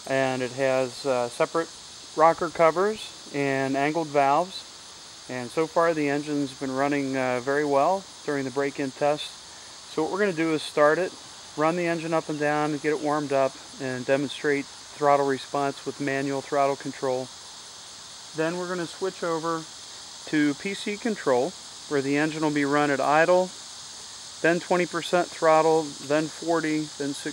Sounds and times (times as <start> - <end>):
Speech: 0.1 - 4.6, 5.3 - 17.3, 18.4 - 19.7, 20.3 - 23.5, 24.4 - 27.3.